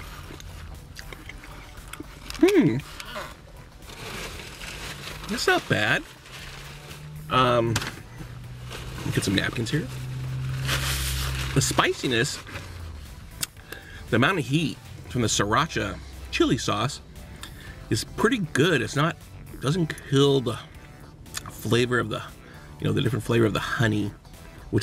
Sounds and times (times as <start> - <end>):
Music: 0.0 - 24.8
Speech: 5.3 - 6.0, 9.0 - 9.9, 11.6 - 12.4, 14.1 - 17.0, 17.9 - 20.6, 21.5 - 24.8.